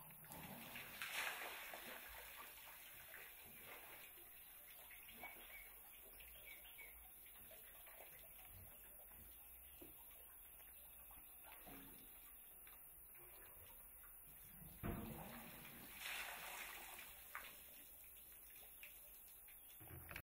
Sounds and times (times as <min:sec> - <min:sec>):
Stream: 0:00.0 - 0:20.2.